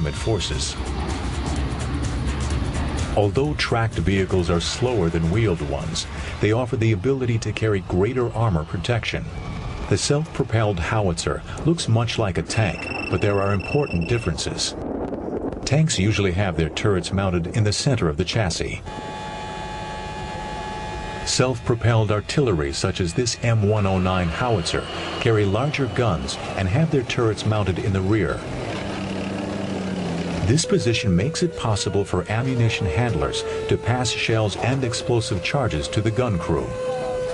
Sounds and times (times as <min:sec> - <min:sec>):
Speech: 0:00.0 - 0:00.8, 0:03.2 - 0:09.3, 0:09.9 - 0:14.8, 0:15.6 - 0:18.8, 0:21.3 - 0:28.4, 0:30.4 - 0:37.2.